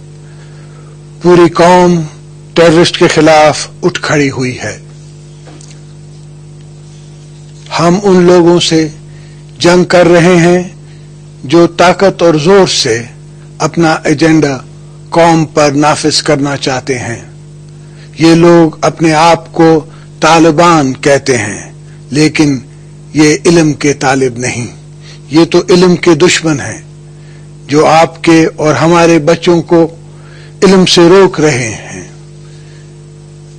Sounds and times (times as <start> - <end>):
Male speech, man speaking: 1.2 - 4.9, 7.7 - 9.0, 9.6 - 10.8, 11.4 - 17.3, 18.2 - 26.9, 27.7 - 30.0, 30.6 - 32.2.